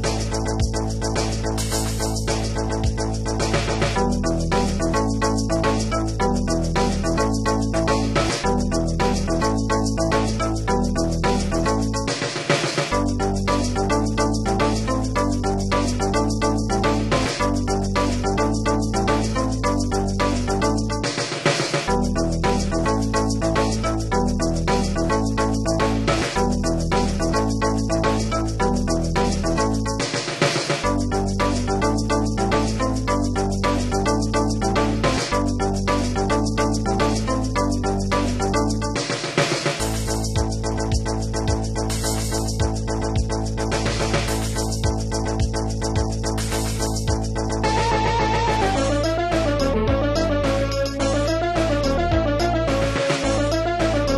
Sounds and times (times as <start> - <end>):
Video game music: 0.0 - 54.1.